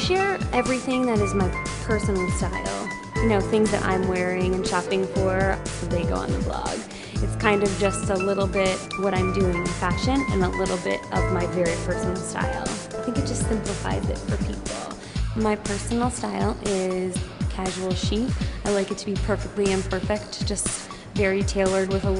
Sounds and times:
Music: 0.0 - 22.1
Speech: 0.0 - 22.1.

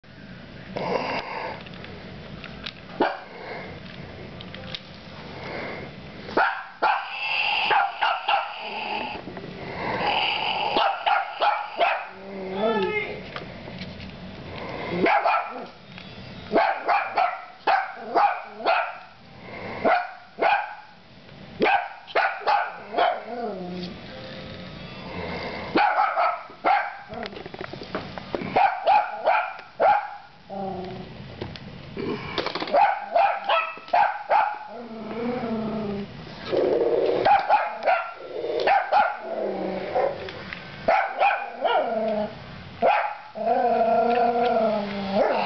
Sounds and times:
Dog: 6.4 - 8.7, 10.7 - 12.2, 15.0 - 15.7, 16.5 - 19.1, 19.8 - 20.9, 21.6 - 23.3, 25.8 - 27.1, 28.6 - 30.3, 32.7 - 34.7, 37.2 - 39.2, 40.9 - 41.9, 42.8 - 43.3.

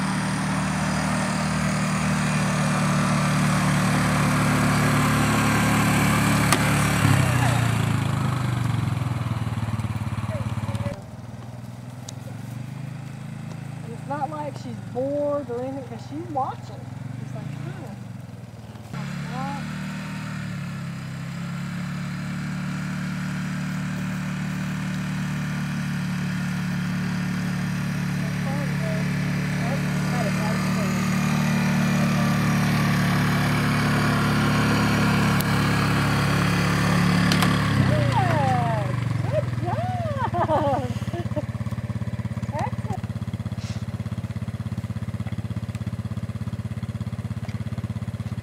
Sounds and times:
Speech: 13.9 - 18.0, 19.1 - 19.7, 28.3 - 29.0, 29.6 - 31.0, 37.9 - 40.2, 42.5 - 43.0.

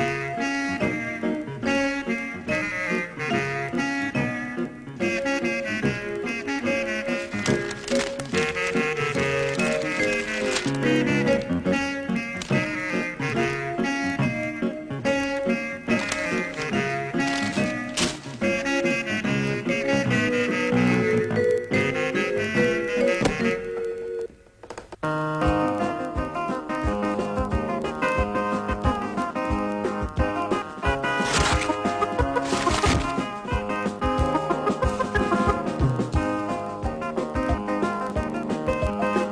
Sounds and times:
Music: 0.0 - 24.4, 25.0 - 39.3.

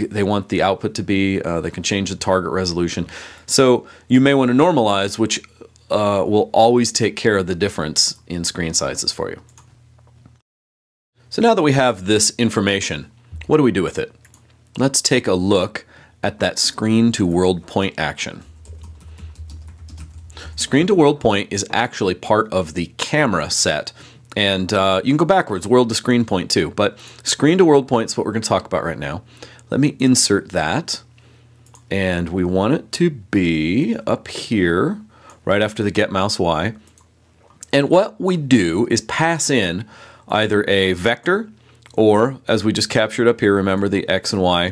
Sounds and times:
Speech: 0.0 - 9.5, 11.3 - 14.2, 14.8 - 18.5, 20.6 - 31.1, 31.9 - 36.8, 37.6 - 44.7
Typing: 18.6 - 20.6.

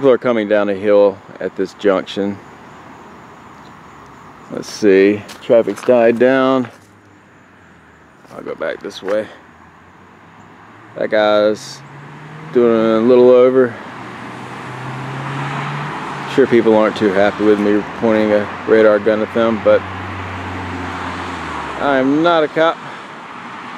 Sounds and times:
Speech: 0.0 - 2.4, 4.5 - 6.8, 8.3 - 9.4, 11.0 - 11.8, 12.5 - 13.8, 16.3 - 19.8, 21.8 - 23.0
Car: 0.0 - 23.7
Outside, urban or manmade: 0.0 - 23.7.

